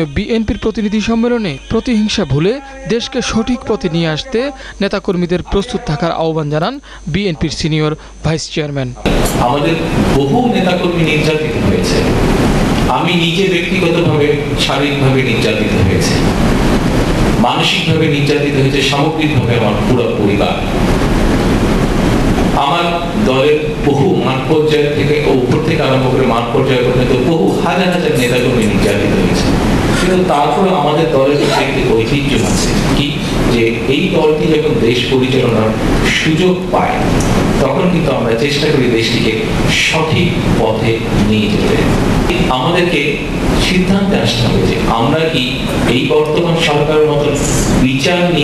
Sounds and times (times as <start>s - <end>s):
Male speech, man speaking: 0.0s - 12.1s, 12.9s - 16.3s, 17.4s - 20.7s, 22.6s - 48.4s
Narration, monologue: 0.0s - 48.4s.